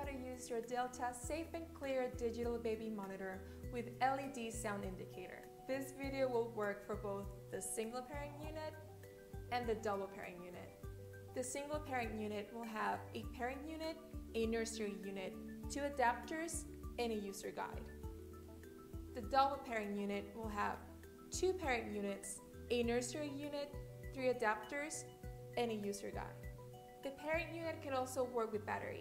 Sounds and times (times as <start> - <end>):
Speech: 0.0 - 8.8, 9.5 - 10.7, 11.4 - 17.9, 19.2 - 20.8, 21.4 - 26.4, 27.1 - 29.0
Music: 0.0 - 29.0.